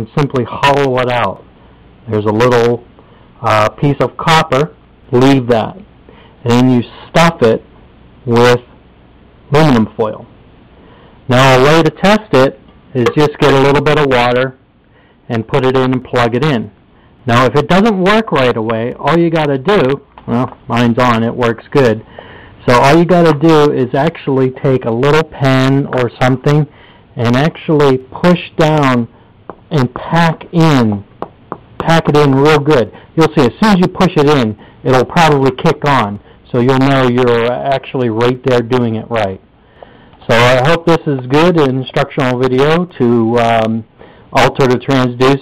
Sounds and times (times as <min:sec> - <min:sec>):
Speech: 0:00.0 - 0:01.5, 0:02.1 - 0:08.8, 0:09.5 - 0:10.3, 0:11.3 - 0:14.6, 0:15.3 - 0:29.1, 0:29.7 - 0:31.1, 0:31.8 - 0:39.4, 0:40.2 - 0:45.4
Inside, small room: 0:00.0 - 0:45.4.